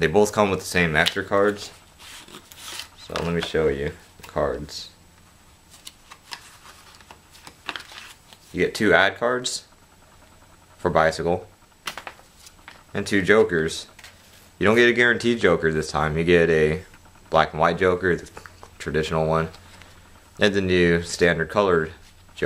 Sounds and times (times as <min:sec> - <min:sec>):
Speech: 0:00.0 - 0:01.8, 0:03.0 - 0:05.0, 0:08.5 - 0:09.7, 0:10.8 - 0:11.5, 0:12.9 - 0:13.9, 0:14.6 - 0:19.6, 0:20.4 - 0:22.4.